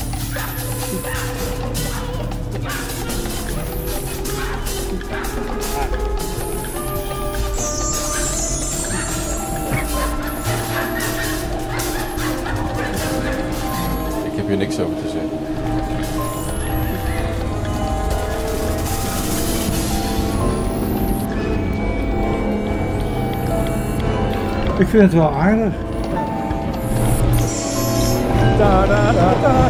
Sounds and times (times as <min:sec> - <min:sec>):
Background music: 0:00.0 - 0:29.7.